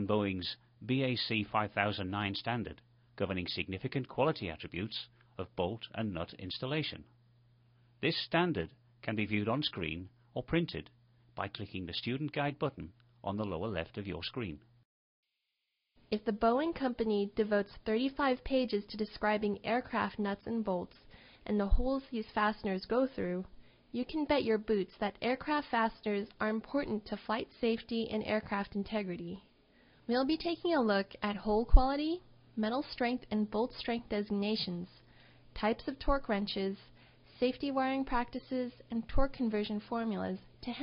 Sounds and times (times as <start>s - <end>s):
Speech: 0.0s - 7.1s, 8.0s - 14.7s, 16.1s - 29.4s, 30.1s - 35.0s, 35.6s - 40.8s.